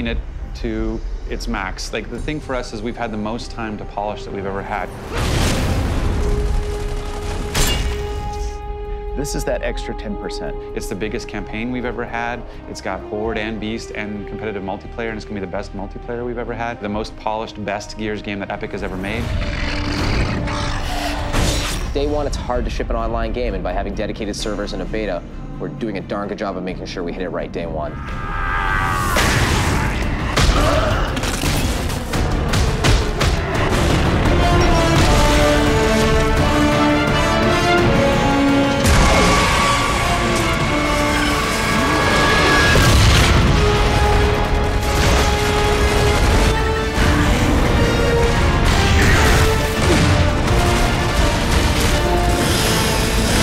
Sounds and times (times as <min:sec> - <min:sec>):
Speech: 0:00.0 - 0:04.9, 0:09.2 - 0:19.3, 0:22.0 - 0:28.0
Music: 0:00.0 - 0:53.4.